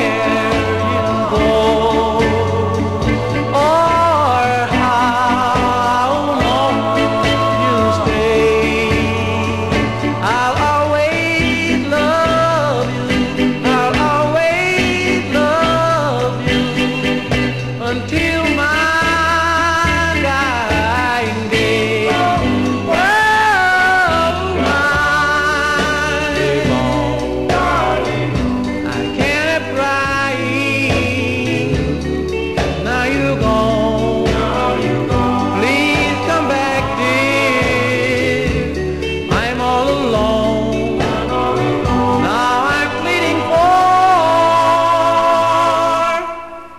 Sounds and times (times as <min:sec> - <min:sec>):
Music: 0:00.0 - 0:46.7.